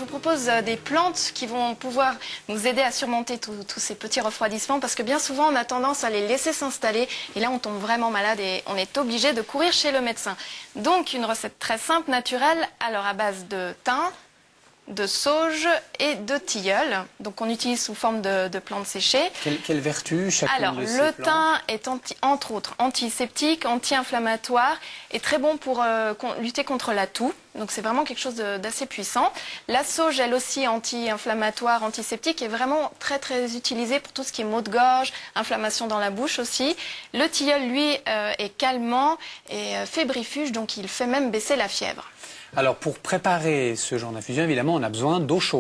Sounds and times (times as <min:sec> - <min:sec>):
Speech: 0:00.0 - 0:14.2, 0:14.9 - 0:42.0, 0:42.6 - 0:45.6.